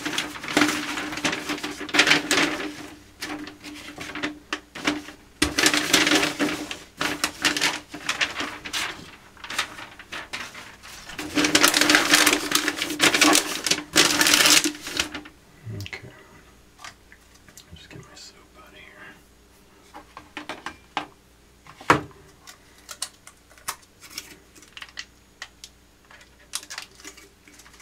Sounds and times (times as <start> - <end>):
Speech: 15.6 - 16.3, 17.6 - 19.2.